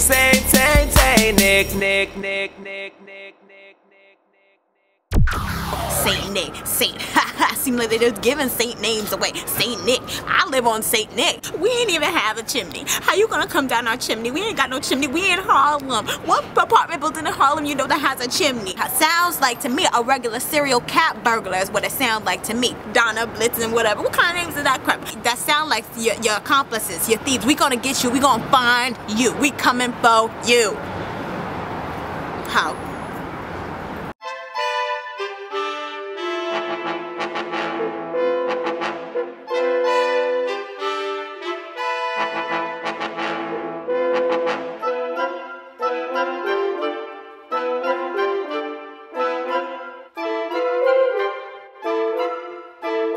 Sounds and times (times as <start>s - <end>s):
Brass instrument: 34.2s - 53.1s.